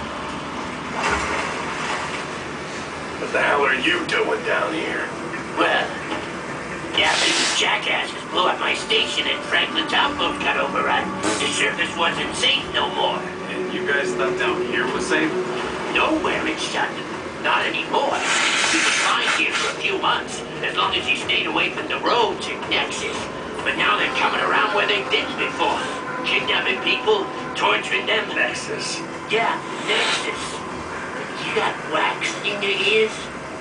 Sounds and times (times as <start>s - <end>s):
Speech: 3.2s - 6.0s, 6.9s - 30.6s, 31.4s - 33.4s.